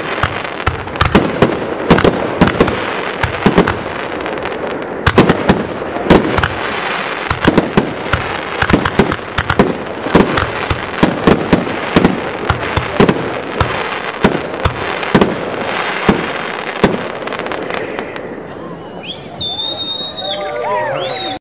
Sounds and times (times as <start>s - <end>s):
Fireworks: 0.0s - 20.4s.